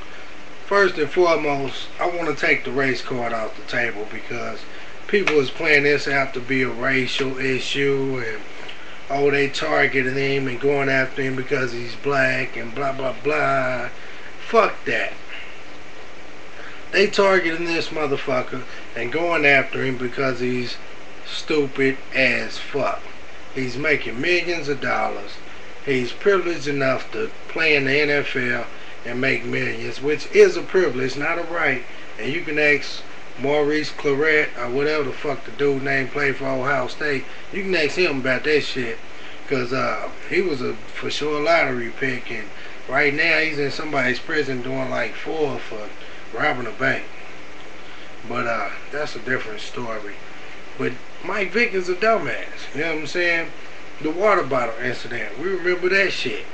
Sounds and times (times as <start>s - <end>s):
Speech: 0.0s - 15.6s, 16.6s - 47.2s, 47.9s - 56.5s.